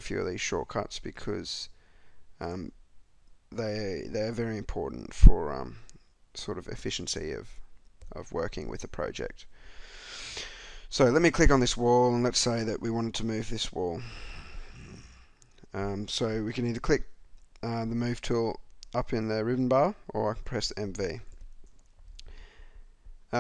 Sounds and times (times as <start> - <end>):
Speech: 0.0 - 1.8, 2.4 - 2.8, 3.6 - 9.5, 10.9 - 14.1, 15.7 - 21.3.